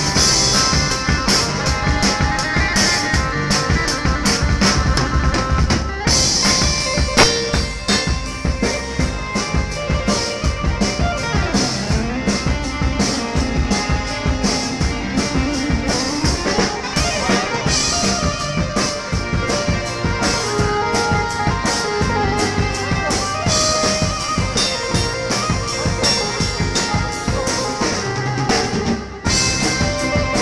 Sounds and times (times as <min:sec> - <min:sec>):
Electric piano: 0:00.0 - 0:30.4.